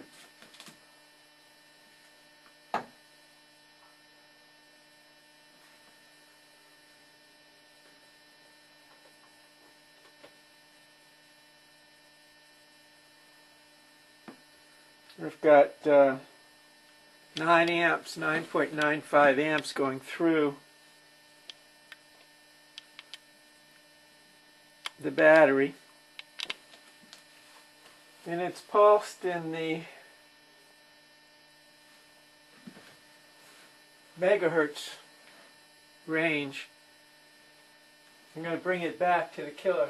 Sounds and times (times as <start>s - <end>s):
Speech: 15.1s - 16.3s, 17.4s - 20.6s, 25.0s - 25.8s, 28.2s - 30.0s, 34.2s - 35.1s, 36.1s - 36.7s, 38.4s - 39.8s.